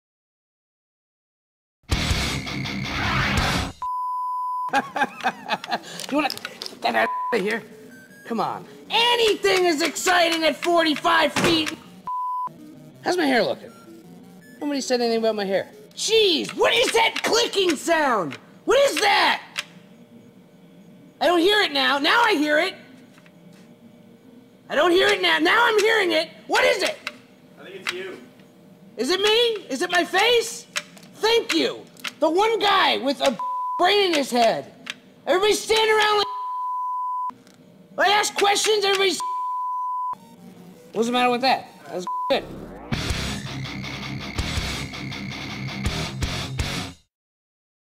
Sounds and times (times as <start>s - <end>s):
Speech: 6.1s - 7.6s, 8.3s - 11.8s, 14.6s - 19.5s, 24.7s - 27.0s, 29.0s - 34.7s, 35.3s - 36.3s, 38.0s - 39.2s.